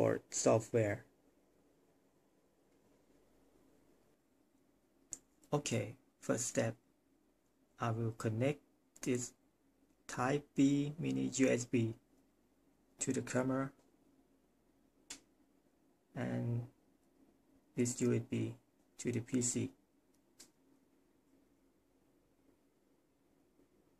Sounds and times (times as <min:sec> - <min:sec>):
Speech: 0:00.0 - 0:01.1, 0:05.5 - 0:06.8, 0:07.8 - 0:09.4, 0:10.1 - 0:12.0, 0:13.0 - 0:13.8, 0:16.2 - 0:16.8, 0:17.8 - 0:19.8.